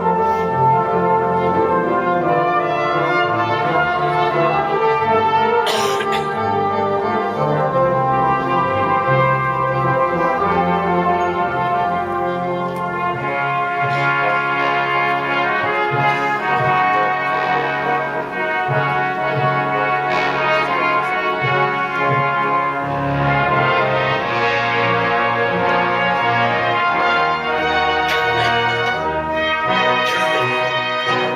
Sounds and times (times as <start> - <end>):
Classical music: 0.0 - 31.3
Orchestra: 0.0 - 31.3
Trombone: 0.0 - 31.3.